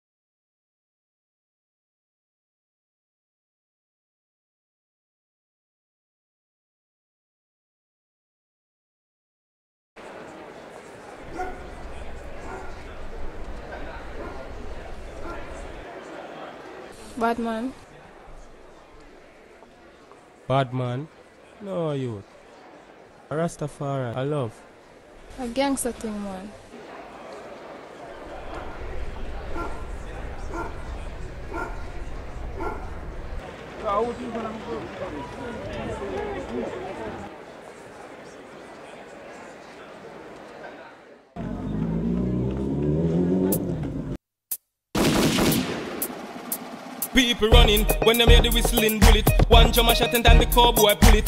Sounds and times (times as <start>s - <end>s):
Crowd: 10.0s - 44.2s, 45.5s - 51.2s
Speech: 33.4s - 41.8s.